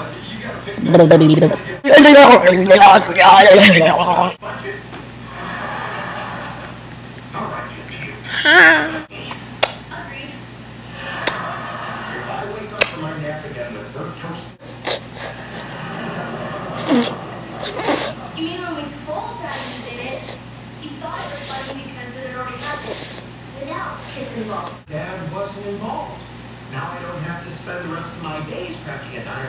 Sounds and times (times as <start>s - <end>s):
Speech: 0.0s - 5.0s, 18.0s - 29.4s.